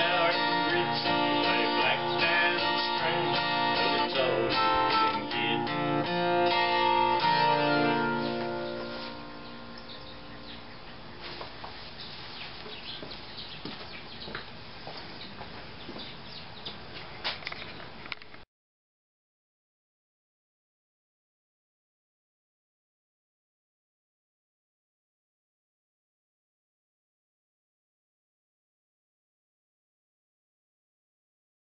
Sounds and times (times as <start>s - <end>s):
Guitar: 0.0s - 11.5s.